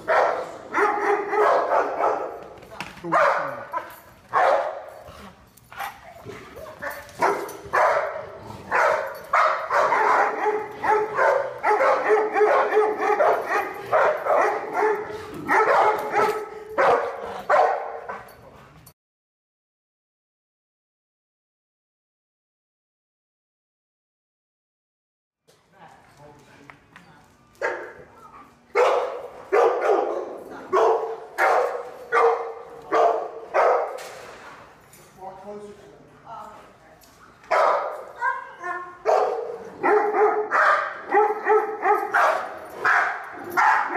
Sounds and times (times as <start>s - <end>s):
Bow-wow: 0.0s - 2.4s, 5.8s - 18.4s, 28.8s - 34.0s, 37.5s - 43.9s.